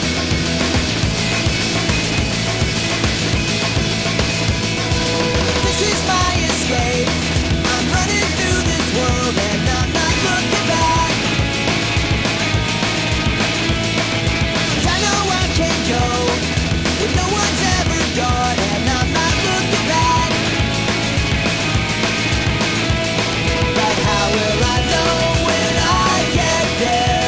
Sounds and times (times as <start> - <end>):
Music: 0.0 - 27.2.